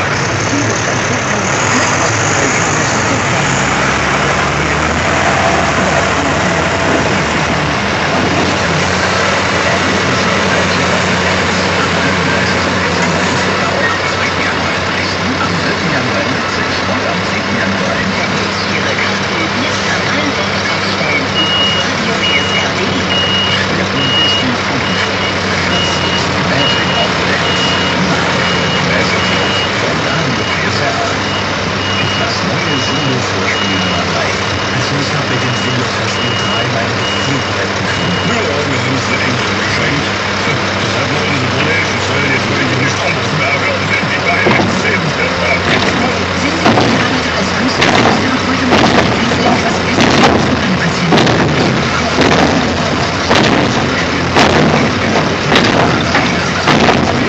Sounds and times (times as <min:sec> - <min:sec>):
Speech: 0:00.0 - 0:57.2.